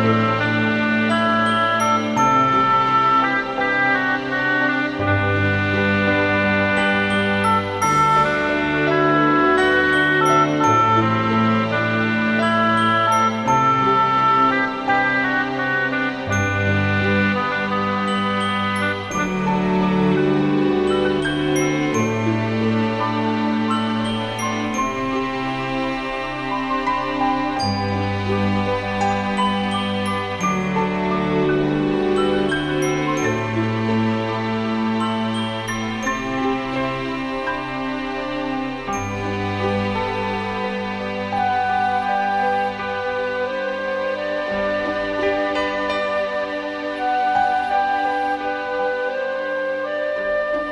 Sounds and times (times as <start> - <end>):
Background music: 0.0 - 50.7.